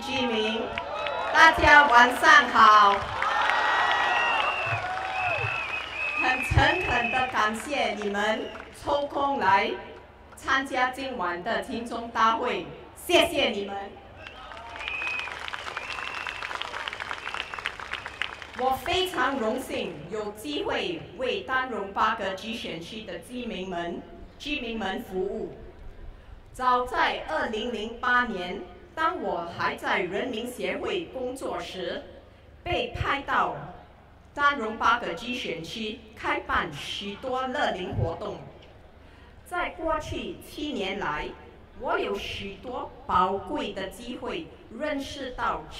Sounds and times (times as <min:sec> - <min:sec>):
Female speech, woman speaking: 0:00.0 - 0:00.7, 0:01.4 - 0:03.0, 0:06.2 - 0:14.0, 0:18.6 - 0:25.6, 0:26.6 - 0:32.1, 0:32.7 - 0:33.8, 0:34.4 - 0:38.5, 0:39.5 - 0:45.7
Narration, monologue: 0:18.5 - 0:45.7.